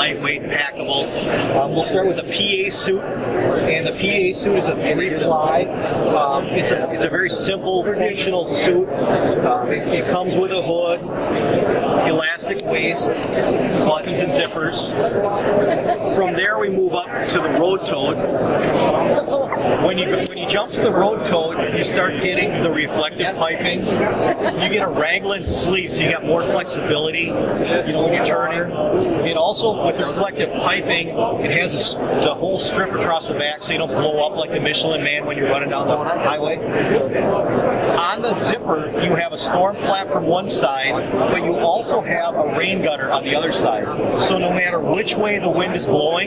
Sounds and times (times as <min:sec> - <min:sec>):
Speech: 0:00.0 - 0:46.2.